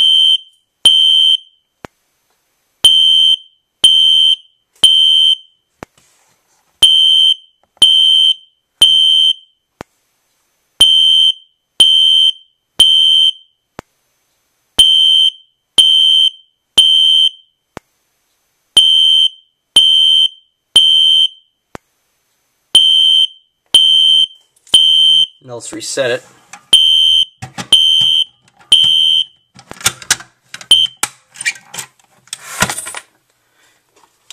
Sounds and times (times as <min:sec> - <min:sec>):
Fire alarm: 0:10.8 - 0:13.6, 0:18.8 - 0:21.5, 0:22.8 - 0:25.4, 0:26.7 - 0:29.5
Speech: 0:25.4 - 0:26.4.